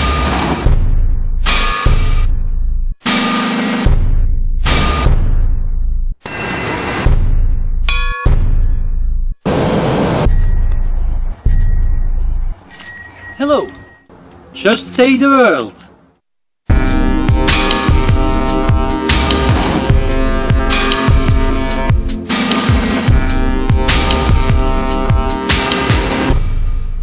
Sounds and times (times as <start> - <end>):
Music: 0.0 - 9.4, 16.7 - 27.0
Speech: 13.4 - 13.8, 14.6 - 16.0.